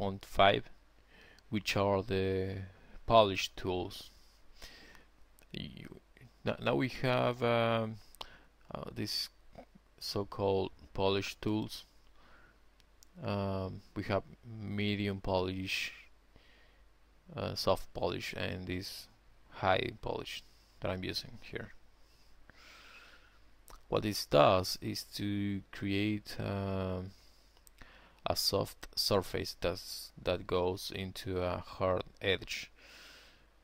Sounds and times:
Speech: 0:00.0 - 0:00.8, 0:01.5 - 0:04.1, 0:05.5 - 0:08.0, 0:08.7 - 0:09.4, 0:10.0 - 0:11.9, 0:13.2 - 0:16.1, 0:17.3 - 0:21.8, 0:23.8 - 0:27.2, 0:28.2 - 0:32.7.

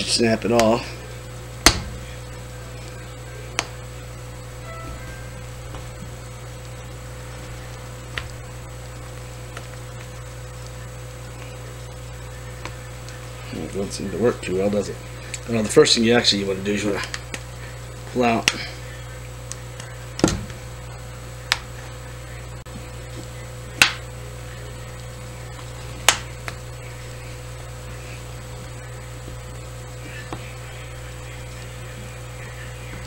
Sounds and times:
Speech: 0:00.0 - 0:01.0, 0:13.4 - 0:17.1, 0:18.1 - 0:20.0.

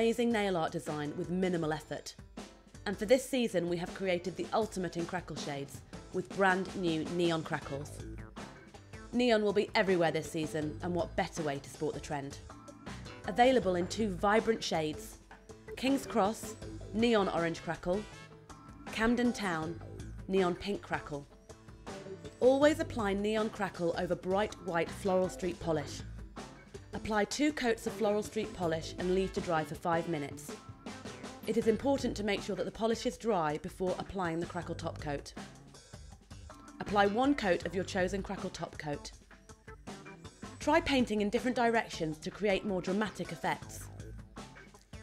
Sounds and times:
Speech: 0:00.0 - 0:02.2, 0:02.9 - 0:08.1, 0:09.2 - 0:12.4, 0:13.3 - 0:15.2, 0:15.8 - 0:18.1, 0:18.9 - 0:21.3, 0:22.4 - 0:26.0, 0:27.0 - 0:30.6, 0:31.5 - 0:35.4, 0:36.8 - 0:39.2, 0:40.6 - 0:43.9
Music: 0:00.0 - 0:45.0.

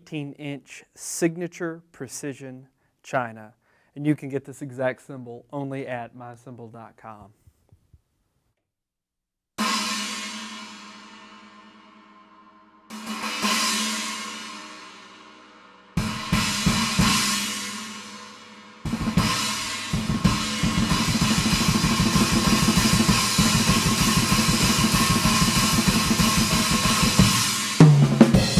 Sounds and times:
Cymbal: 0:09.6 - 0:28.5
Snare drum: 0:18.9 - 0:28.5.

